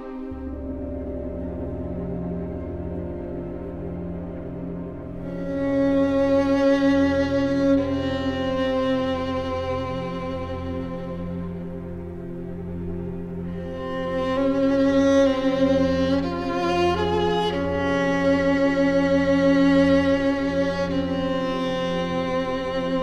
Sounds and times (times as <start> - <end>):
Cello: 0.0 - 23.0
Soundtrack music: 0.0 - 23.0.